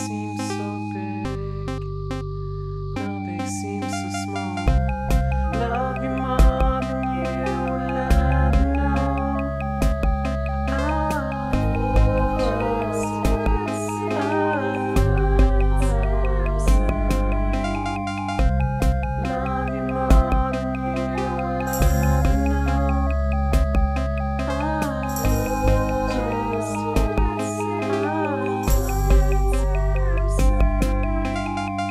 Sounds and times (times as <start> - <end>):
Music: 0.0 - 31.9.